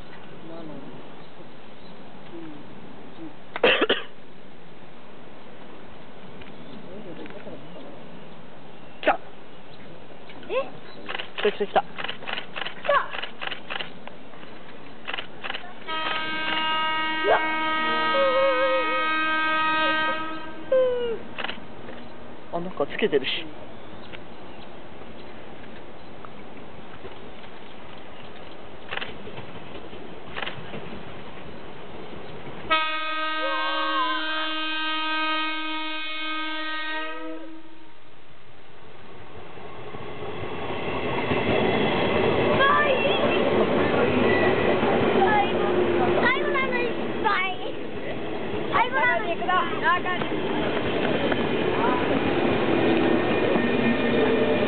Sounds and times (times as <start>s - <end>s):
Train: 0.0s - 54.6s
Vehicle horn, car horn, honking: 15.9s - 20.6s, 32.7s - 37.9s.